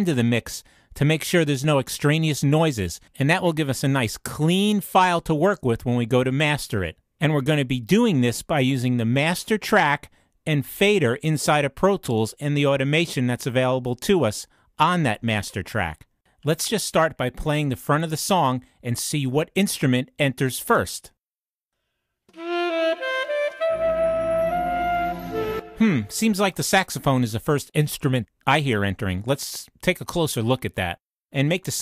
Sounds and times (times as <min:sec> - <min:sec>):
Speech: 0:00.0 - 0:21.2, 0:25.8 - 0:31.8
Flute: 0:22.3 - 0:26.4.